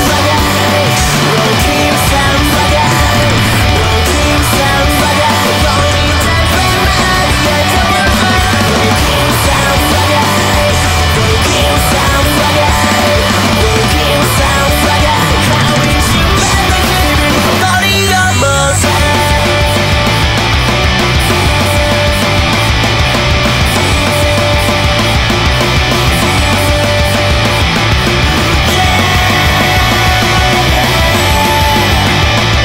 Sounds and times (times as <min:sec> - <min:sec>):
Music: 0:00.0 - 0:32.6.